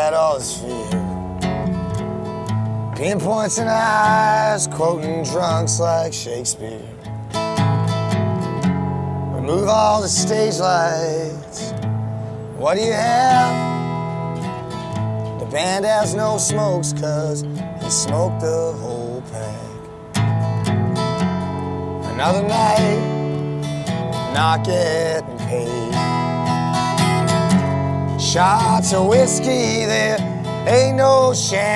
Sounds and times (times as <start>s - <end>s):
Music: 0.0s - 31.7s.